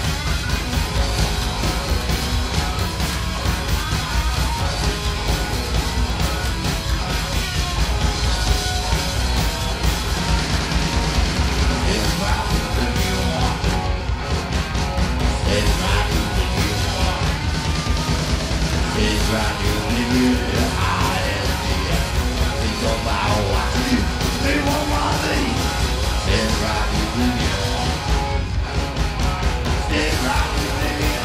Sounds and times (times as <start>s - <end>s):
Punk rock: 0.0s - 31.2s
Singing: 11.7s - 14.0s, 15.2s - 17.7s, 18.8s - 28.1s, 29.7s - 31.2s.